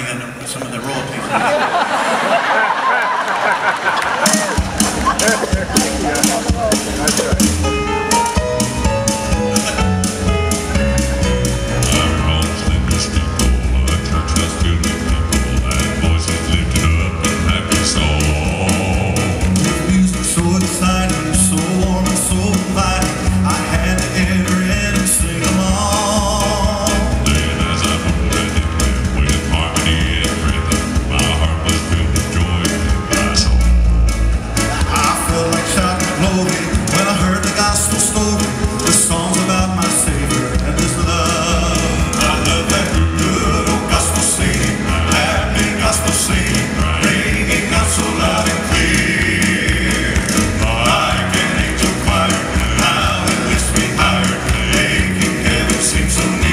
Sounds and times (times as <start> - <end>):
Music: 4.2 - 56.5
Male singing: 11.8 - 33.6, 34.8 - 56.5.